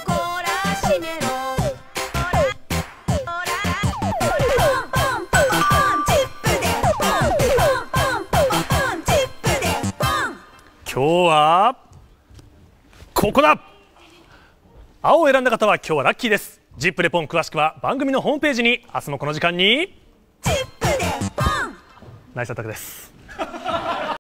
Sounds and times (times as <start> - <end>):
Music: 0.0 - 10.5, 20.4 - 22.3.